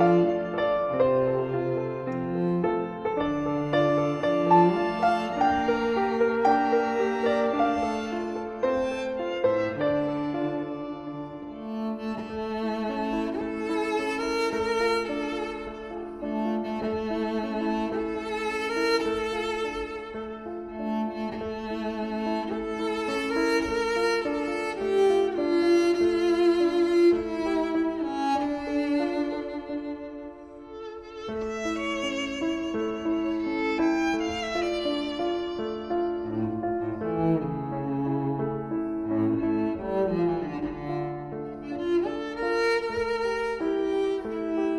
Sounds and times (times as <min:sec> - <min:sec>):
Cello: 0:00.0 - 0:44.7
Violin, fiddle: 0:00.0 - 0:44.7.